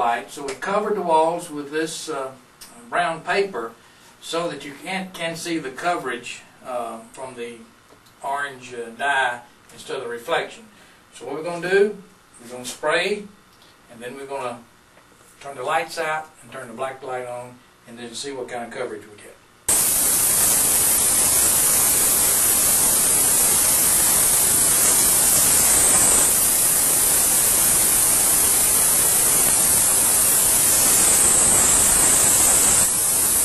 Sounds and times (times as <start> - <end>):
Speech: 0.0 - 14.7, 15.4 - 19.4
Spray: 19.7 - 33.4.